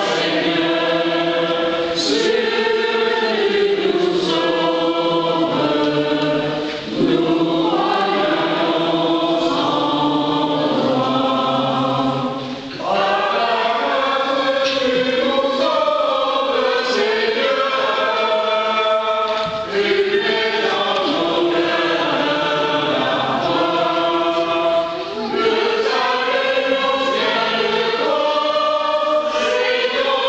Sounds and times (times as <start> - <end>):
Mantra: 0.0 - 30.2.